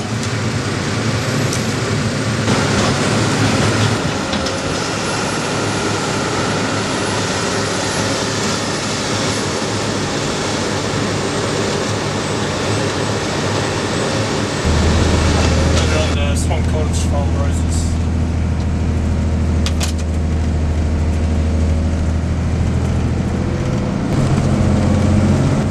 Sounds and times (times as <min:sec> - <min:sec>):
Vehicle: 0:00.0 - 0:25.7.